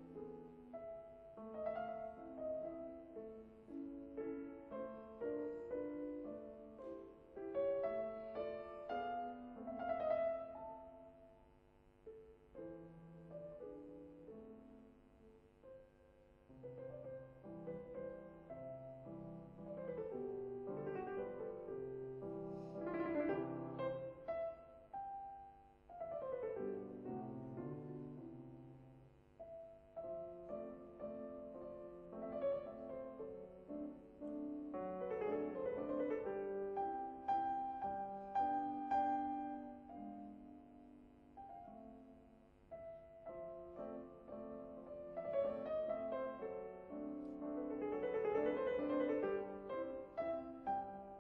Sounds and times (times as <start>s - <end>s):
Piano: 0.0s - 51.2s.